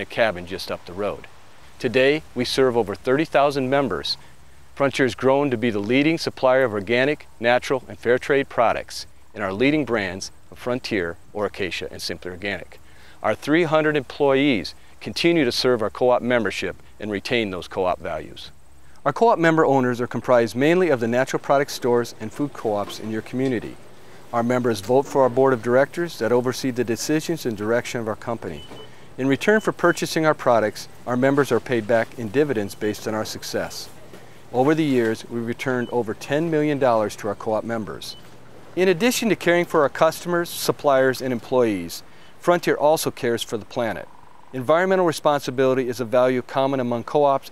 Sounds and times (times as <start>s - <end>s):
Speech: 0.0s - 4.2s, 4.8s - 38.2s, 38.8s - 47.5s.